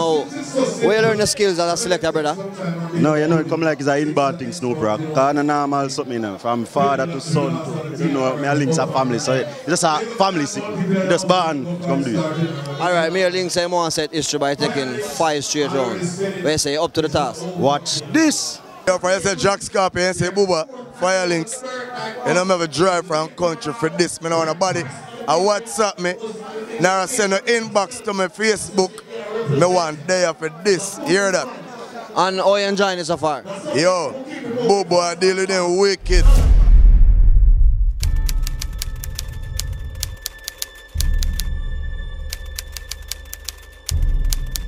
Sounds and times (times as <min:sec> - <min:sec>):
Speech: 0:00.0 - 0:36.6.